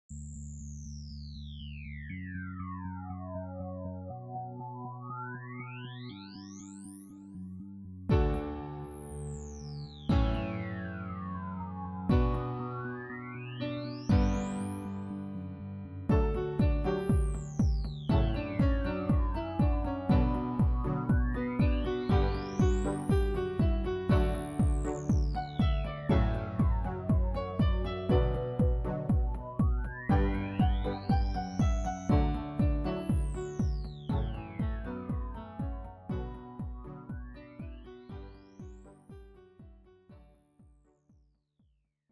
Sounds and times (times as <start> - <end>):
Music: 0.1 - 41.3.